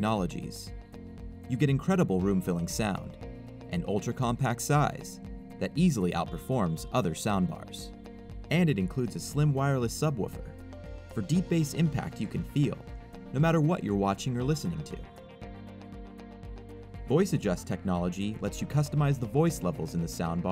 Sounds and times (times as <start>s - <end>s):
Speech: 0.0s - 0.7s, 1.5s - 7.9s, 8.5s - 10.5s, 11.2s - 15.1s, 17.1s - 20.5s
Music: 0.0s - 20.5s.